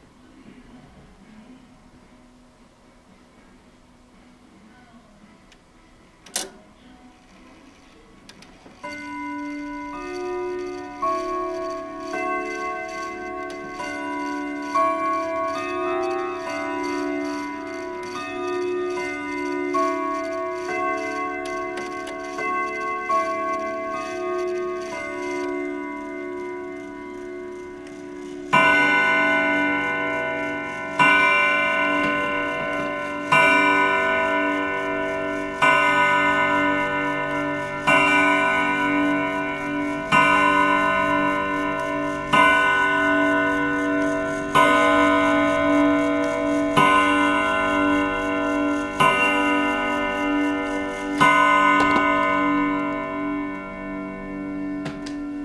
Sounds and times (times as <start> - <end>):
Clock: 7.3 - 55.4.